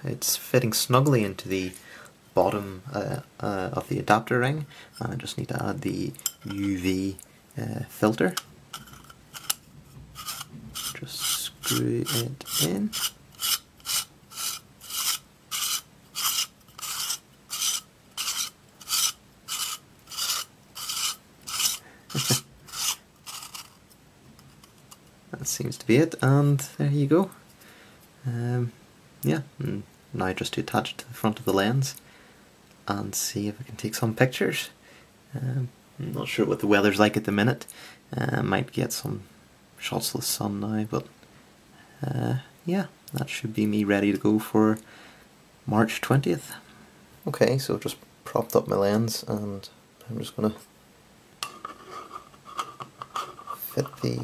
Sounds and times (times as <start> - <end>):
Speech: 0.0 - 1.8, 2.4 - 8.4, 11.0 - 13.0, 25.3 - 27.4, 28.2 - 32.0, 32.9 - 41.1, 42.0 - 44.9, 45.7 - 50.7, 53.6 - 54.2
Inside, small room: 0.0 - 54.2.